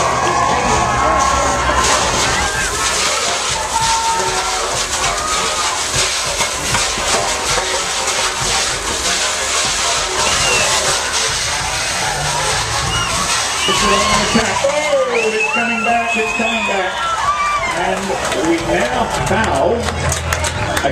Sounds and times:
Speech: 13.7 - 17.0, 17.7 - 20.0.

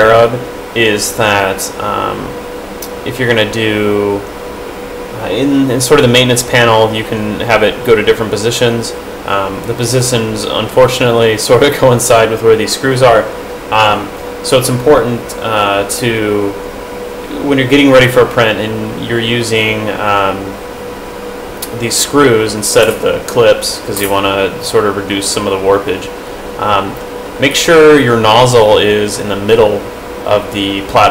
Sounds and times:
Speech: 0.0 - 4.3, 5.2 - 16.6, 17.3 - 20.6, 21.6 - 31.1.

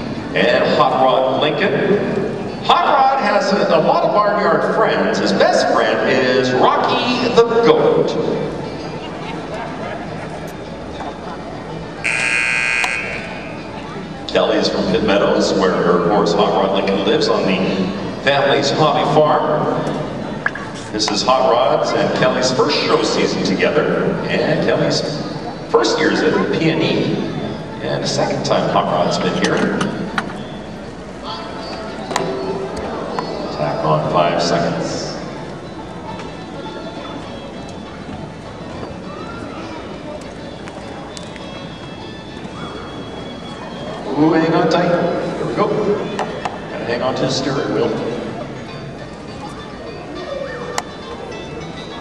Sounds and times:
Speech: 0.0 - 10.1, 13.8 - 30.0, 31.2 - 35.3, 43.7 - 48.5.

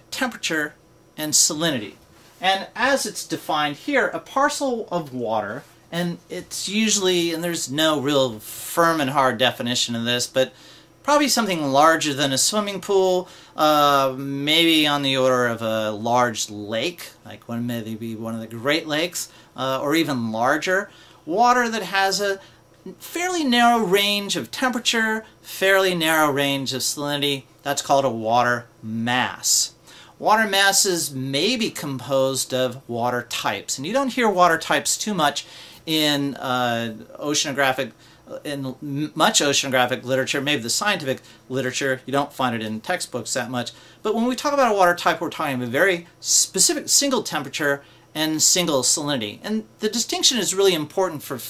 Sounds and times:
Speech: 0.0 - 51.5.

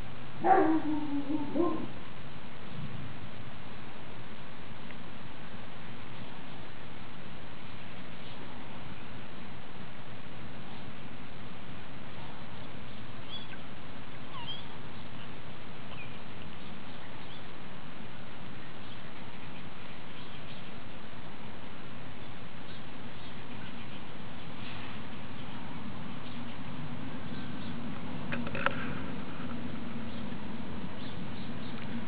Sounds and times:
Outside, rural or natural: 0.0 - 32.0.

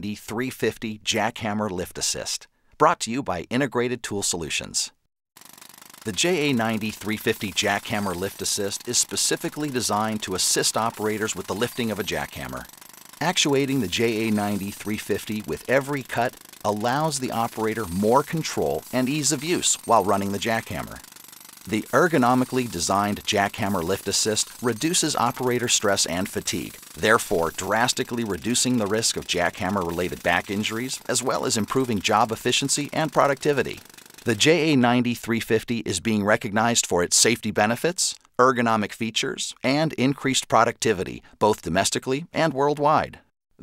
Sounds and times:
Narration, monologue: 0.0 - 43.6
Jackhammer: 5.4 - 34.6.

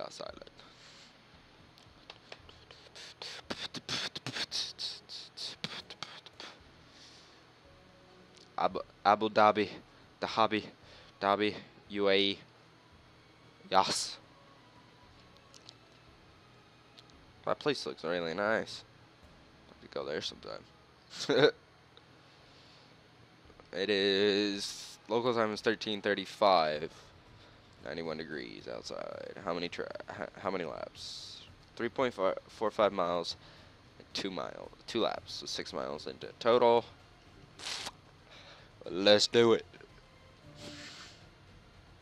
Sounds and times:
Speech: 0.0 - 0.5, 8.6 - 12.4, 13.7 - 14.2, 17.5 - 18.8, 19.8 - 20.6, 23.7 - 27.0, 27.8 - 33.4, 34.1 - 36.9, 38.8 - 39.7
Music: 0.0 - 42.0.

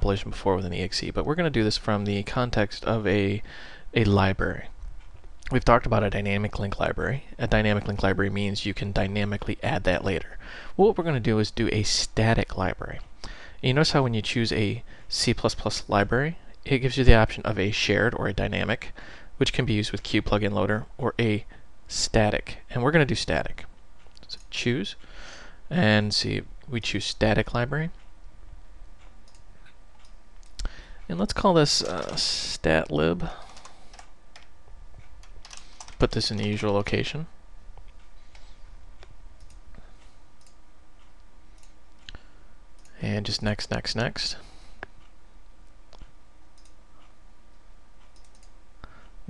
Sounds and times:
Speech: 0.0 - 4.8, 5.4 - 25.0, 25.7 - 28.0, 31.1 - 33.4, 36.0 - 37.4, 42.9 - 44.5.

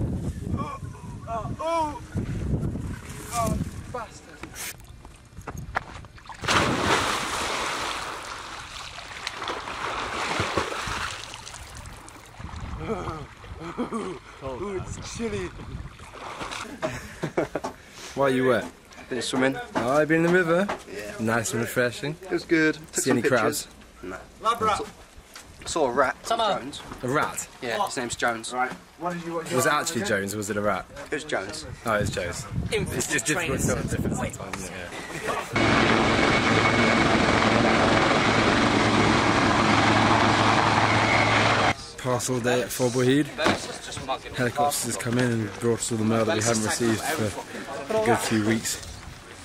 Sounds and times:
Outside, rural or natural: 0.0 - 49.4
Helicopter: 35.6 - 41.8.

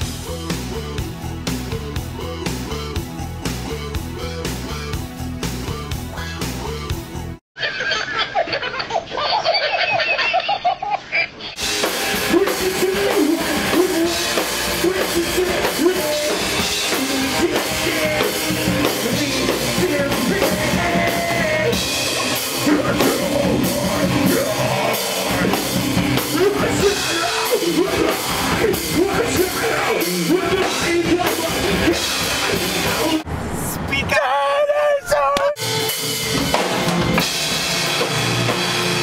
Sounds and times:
Music: 0.0 - 7.4, 11.6 - 33.3, 35.6 - 39.0
Baby laughter: 7.6 - 11.6.

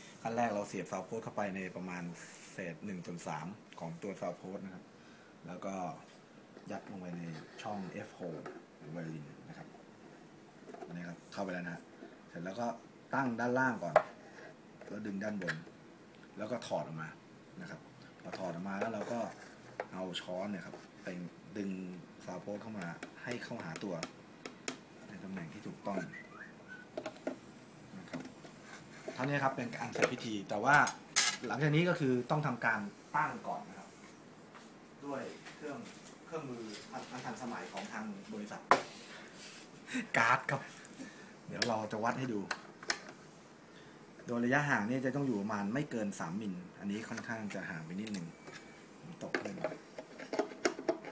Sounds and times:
Speech: 0.2 - 4.8, 6.7 - 9.7, 10.9 - 14.0, 14.9 - 15.6, 16.4 - 24.1, 25.1 - 26.2, 29.2 - 34.0, 35.0 - 38.7, 40.0 - 40.8, 41.5 - 42.6, 44.3 - 48.3, 49.1 - 49.8.

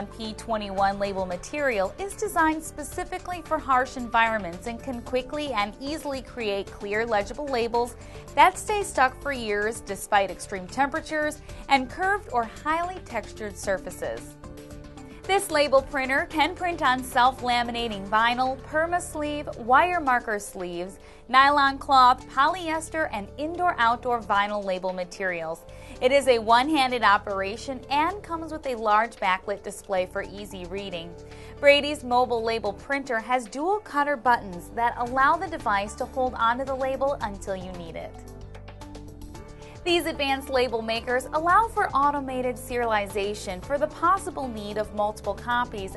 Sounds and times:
Speech: 0.0 - 14.3, 15.3 - 38.1, 39.8 - 45.9
Music: 0.0 - 45.9.

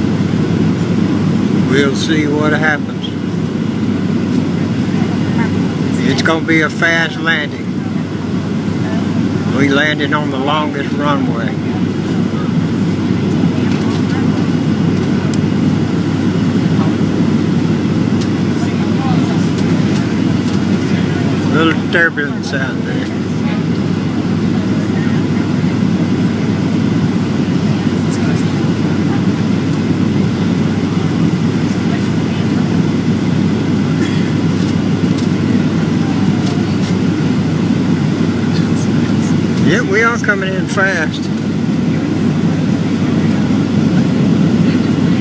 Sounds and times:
Speech: 1.6 - 3.2, 4.4 - 8.2, 8.8 - 14.6, 18.5 - 19.9, 20.8 - 23.8, 24.6 - 26.8, 27.6 - 33.0, 35.4 - 37.1, 38.4 - 45.2.

